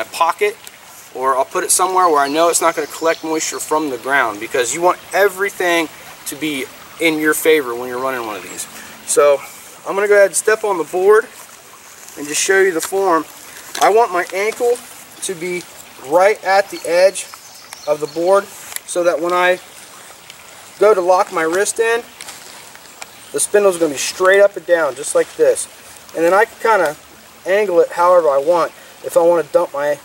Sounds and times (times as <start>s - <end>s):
Speech: 0.0s - 11.3s, 12.2s - 17.3s, 17.9s - 19.7s, 20.8s - 22.1s, 23.4s - 30.0s
Outside, rural or natural: 0.0s - 30.0s
Trickle, dribble: 0.0s - 30.0s.